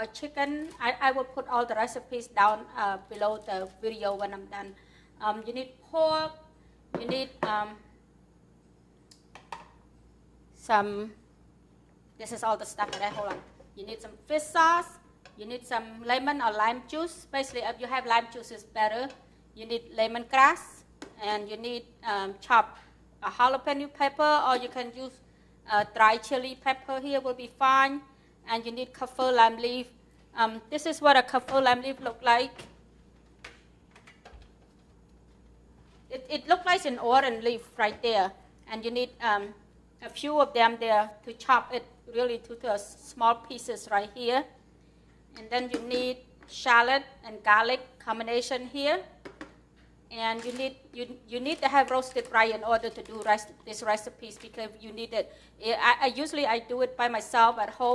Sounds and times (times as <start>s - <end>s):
Speech: 0.0s - 7.8s, 10.6s - 11.2s, 12.2s - 32.6s, 36.1s - 44.6s, 45.4s - 49.1s, 50.1s - 57.9s.